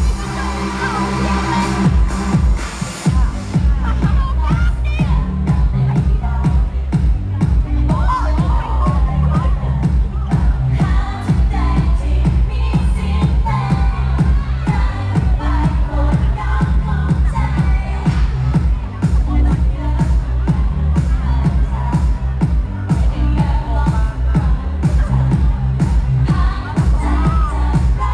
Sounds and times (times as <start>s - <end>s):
Speech: 0.0s - 2.1s, 2.9s - 28.1s
Music: 0.0s - 28.1s
Female singing: 3.1s - 28.1s.